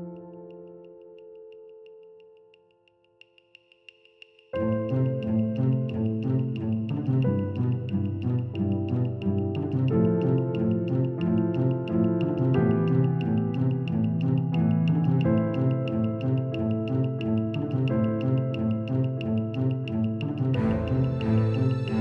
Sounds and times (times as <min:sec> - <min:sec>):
Independent music: 0:04.6 - 0:22.0.